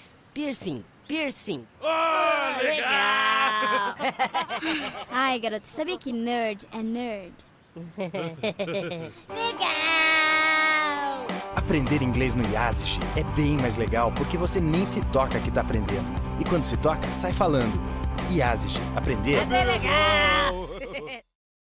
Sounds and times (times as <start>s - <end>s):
Music: 9.3s - 20.8s
Speech: 11.6s - 19.8s.